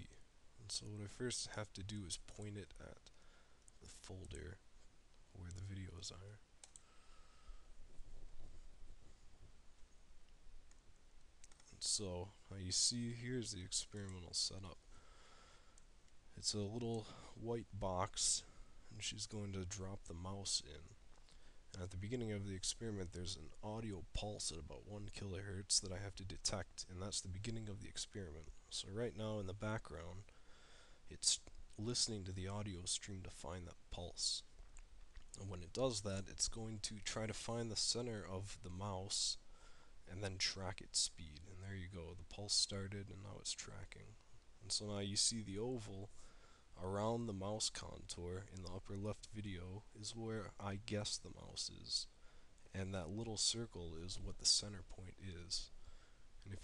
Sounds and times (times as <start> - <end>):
Speech: 0.0 - 3.1, 3.8 - 4.6, 5.3 - 6.4, 11.7 - 14.8, 16.3 - 21.0, 21.7 - 30.3, 31.1 - 34.5, 35.4 - 39.4, 40.1 - 46.2, 46.8 - 55.7.